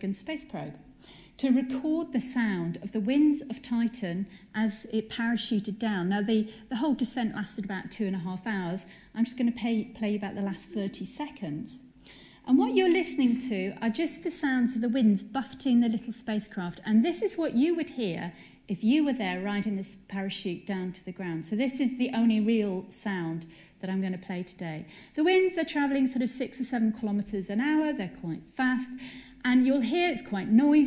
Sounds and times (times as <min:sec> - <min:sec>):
Speech: 0:00.0 - 0:00.8, 0:01.4 - 0:11.8, 0:12.5 - 0:30.8.